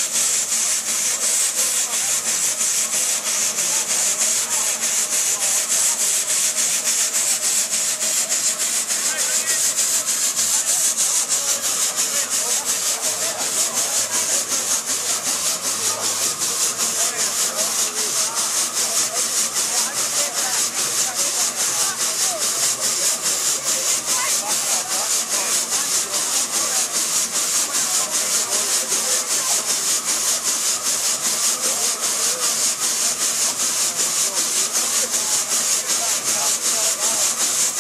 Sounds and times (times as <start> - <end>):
Engine: 0.0 - 37.8
Speech: 0.0 - 37.8.